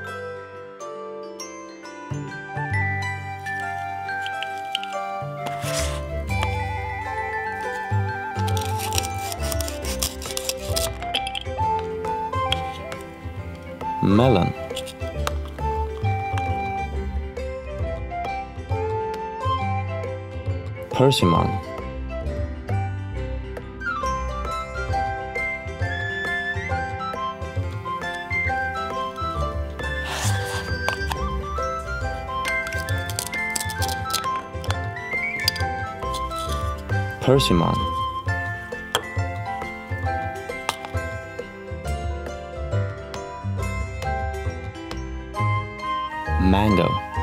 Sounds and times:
Music: 0.0s - 47.2s.

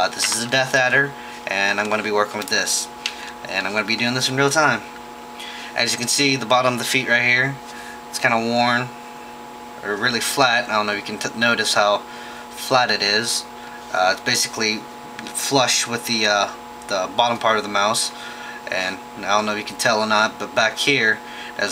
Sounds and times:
Speech: 0.0s - 4.9s, 5.8s - 9.0s, 9.8s - 12.0s, 12.6s - 21.7s.

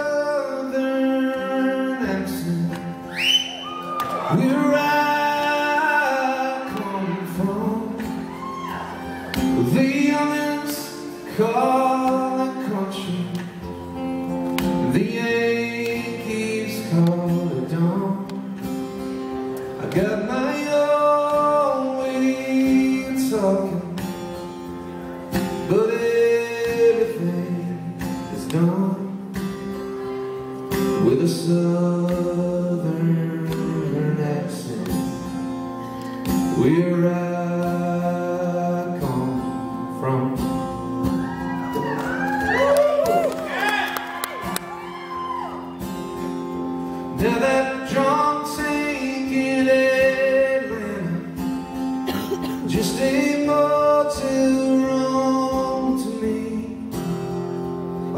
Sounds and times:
Male singing: 0.0s - 2.9s, 4.2s - 8.1s, 9.5s - 13.4s, 14.8s - 18.4s, 19.8s - 24.0s, 25.7s - 29.2s, 31.0s - 35.0s, 36.6s - 40.4s, 47.1s - 51.3s, 52.6s - 56.9s
Guitar: 0.0s - 58.1s.

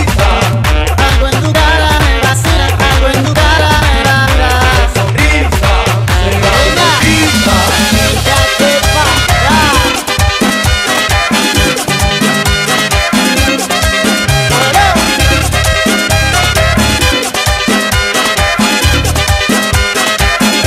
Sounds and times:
Music: 0.0s - 20.6s.

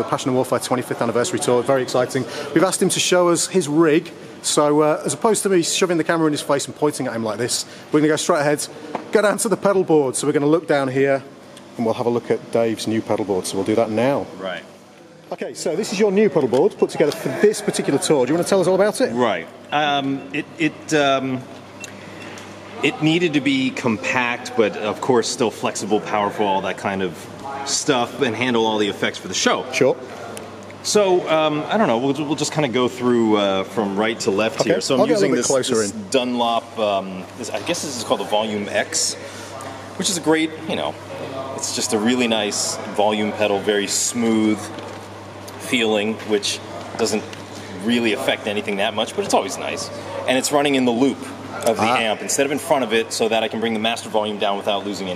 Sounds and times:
Speech: 0.0s - 14.7s, 15.3s - 21.5s, 22.8s - 44.8s, 45.5s - 55.1s.

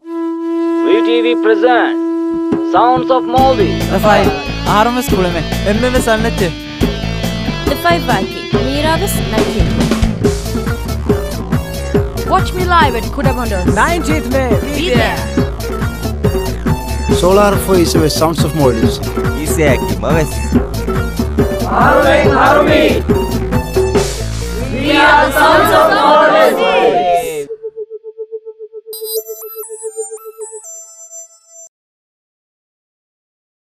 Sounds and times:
Music: 0.0s - 31.7s.

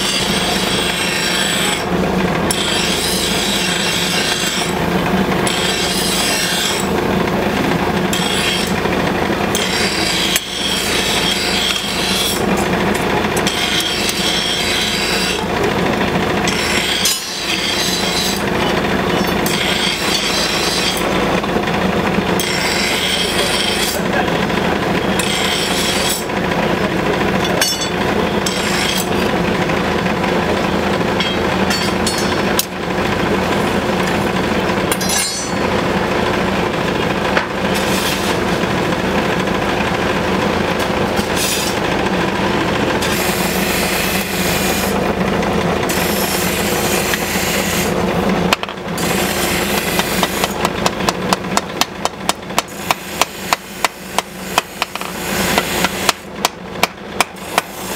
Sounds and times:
Engine: 0.0s - 57.9s.

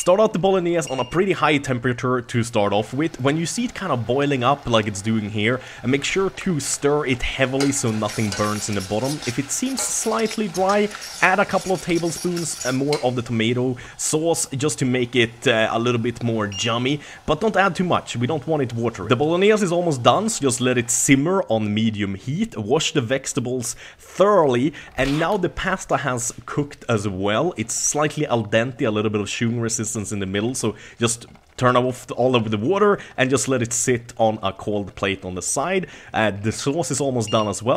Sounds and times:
Sizzle: 2.5s - 21.2s
Frying (food): 2.6s - 21.2s
Stir: 2.8s - 20.8s.

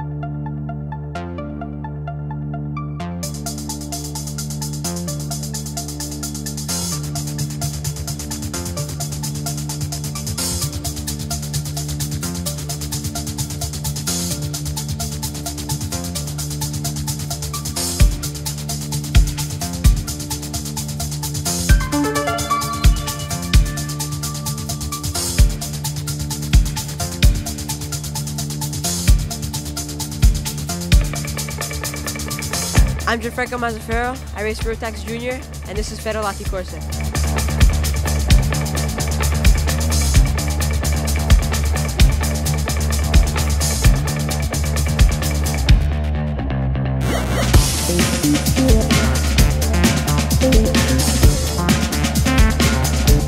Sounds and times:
Music: 0.0s - 53.2s
Speech: 33.0s - 36.9s.

